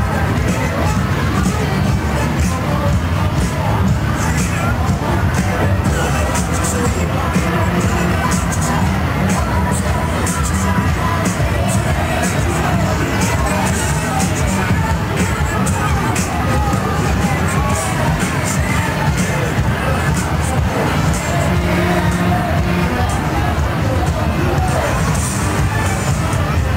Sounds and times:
Music: 0:00.0 - 0:26.7.

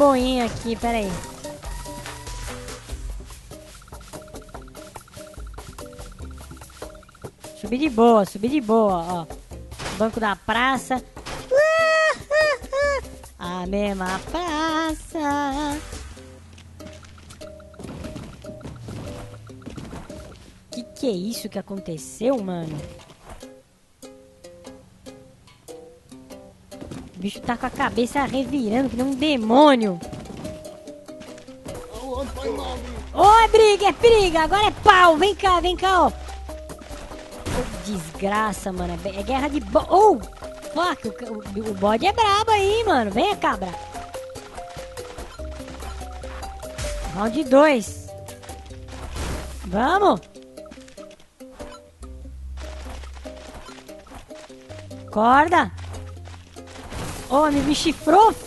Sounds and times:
Speech: 0:00.0 - 0:01.2, 0:07.6 - 0:09.3, 0:10.0 - 0:11.0, 0:13.4 - 0:15.8, 0:20.8 - 0:22.9, 0:27.2 - 0:30.0, 0:31.9 - 0:36.2, 0:37.6 - 0:40.2, 0:40.8 - 0:43.8, 0:47.1 - 0:48.1, 0:49.7 - 0:50.2, 0:55.2 - 0:55.8, 0:57.3 - 0:58.4
Music: 0:00.0 - 0:58.4.

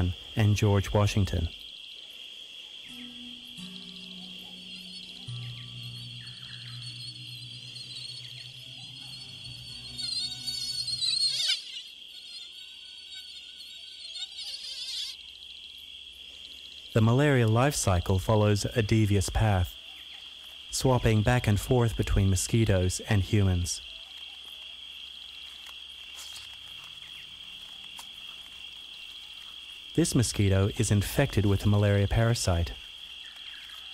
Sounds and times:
Speech: 0:00.0 - 0:01.6, 0:17.0 - 0:19.8, 0:20.7 - 0:23.8, 0:30.0 - 0:32.8
Environmental noise: 0:00.0 - 0:33.9.

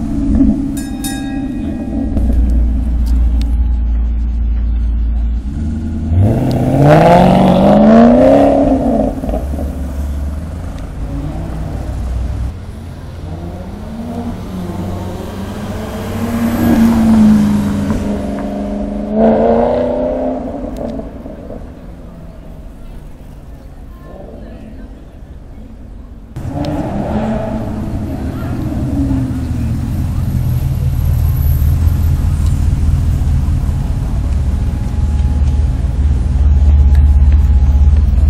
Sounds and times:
Speech: 0:22.1 - 0:26.4, 0:28.0 - 0:30.6.

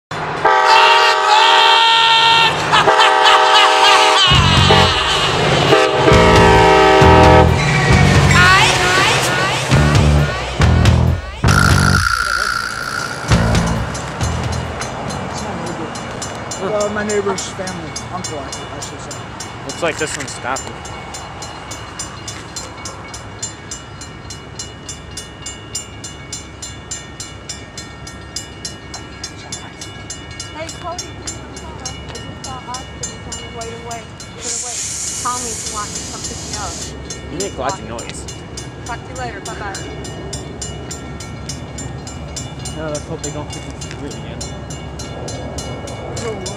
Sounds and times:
Railroad car, train wagon: 0:00.1 - 0:46.5
Train horn: 0:00.4 - 0:07.7, 0:11.5 - 0:14.1.

